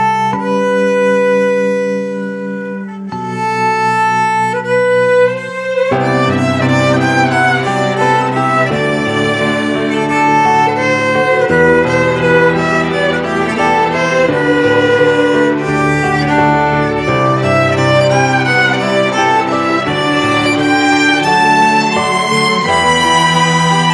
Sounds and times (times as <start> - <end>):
Musical instrument: 0.0 - 23.9.